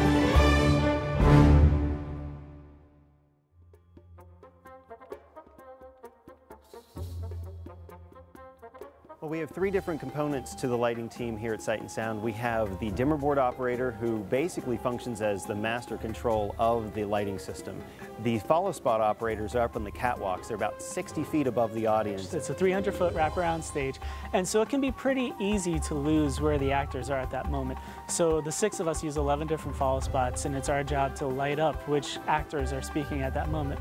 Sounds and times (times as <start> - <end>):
Music: 0.0 - 33.8
Speech: 9.2 - 33.8.